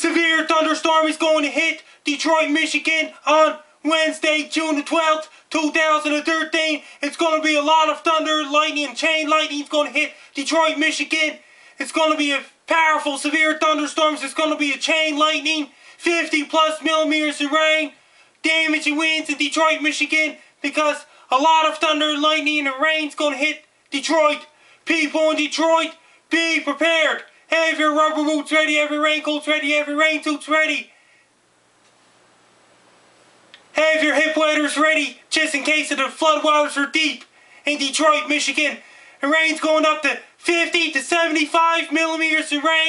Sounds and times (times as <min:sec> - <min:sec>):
Speech: 0:00.0 - 0:30.9, 0:33.7 - 0:42.8.